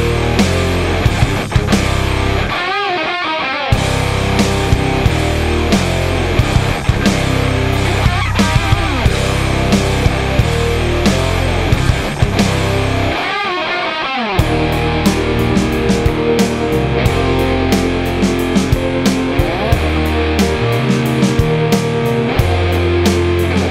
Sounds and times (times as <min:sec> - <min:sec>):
Electric guitar: 0:00.0 - 0:23.7
Strum: 0:03.8 - 0:13.6, 0:14.3 - 0:23.7.